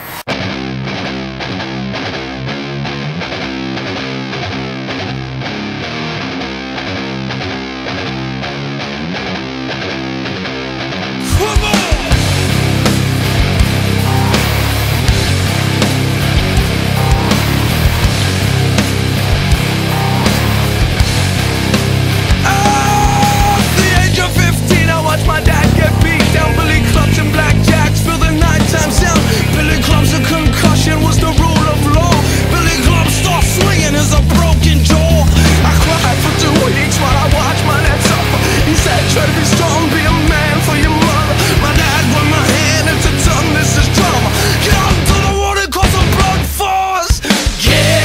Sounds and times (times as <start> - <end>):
Music: 0.0 - 48.0.